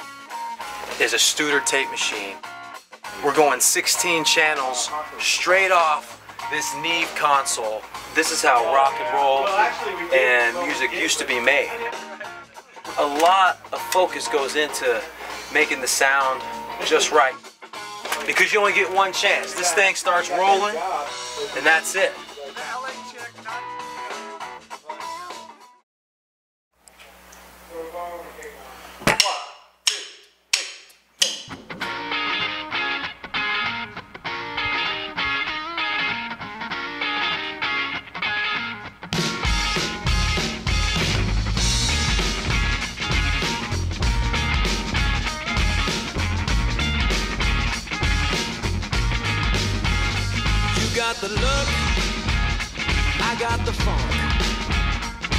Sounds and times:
Speech: 0:01.0 - 0:02.4, 0:03.2 - 0:12.0, 0:12.6 - 0:17.4, 0:18.2 - 0:23.7, 0:27.7 - 0:29.5.

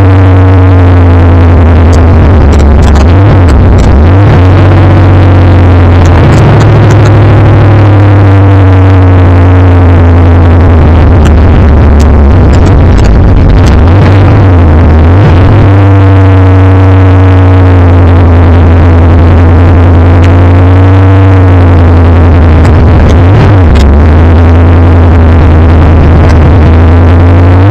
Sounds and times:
Car: 0:00.0 - 0:27.7.

